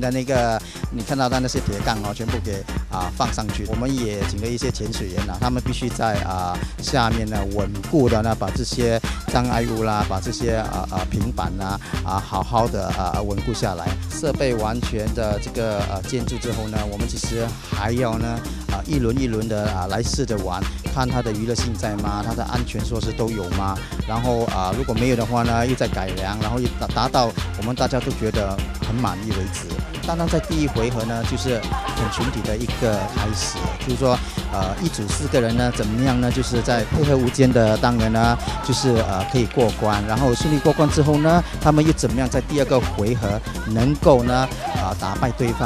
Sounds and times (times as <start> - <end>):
Music: 0.0 - 45.6
Speech: 0.0 - 45.6.